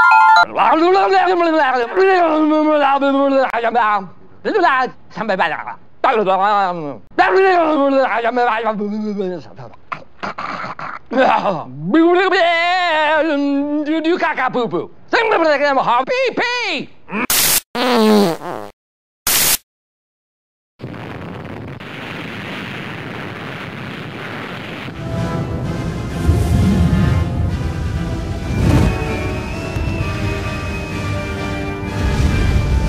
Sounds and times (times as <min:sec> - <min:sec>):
Speech: 0:00.5 - 0:09.8, 0:11.2 - 0:16.9.